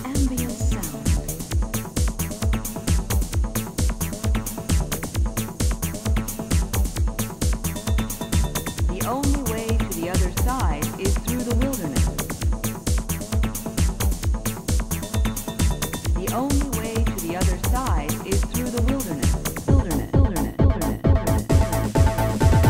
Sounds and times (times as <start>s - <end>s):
Speech: 0.0s - 1.3s, 8.9s - 12.2s, 16.2s - 21.0s
Music: 0.0s - 22.6s.